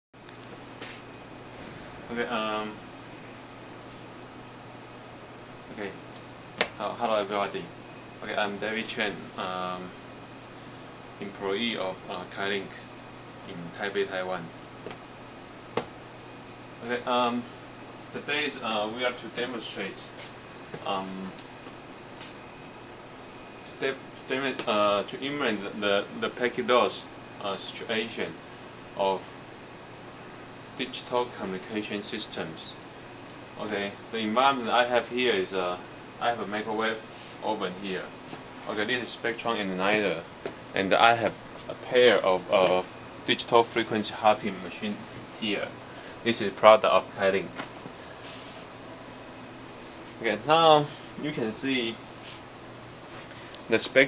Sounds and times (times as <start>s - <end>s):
Speech: 2.1s - 2.8s, 5.7s - 6.0s, 6.8s - 10.0s, 11.2s - 14.5s, 16.8s - 17.5s, 18.1s - 20.2s, 20.8s - 21.4s, 23.7s - 28.4s, 29.0s - 29.4s, 30.8s - 32.8s, 33.6s - 47.6s, 50.2s - 52.0s, 53.7s - 54.0s.